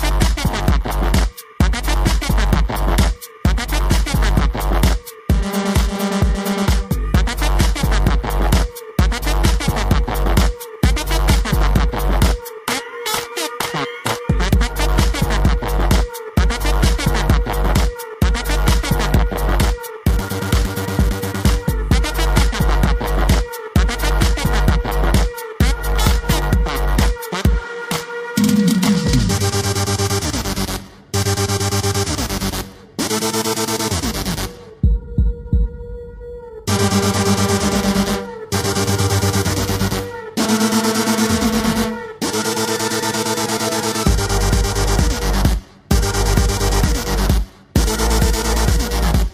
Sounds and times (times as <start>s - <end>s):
Music: 0.0s - 49.3s.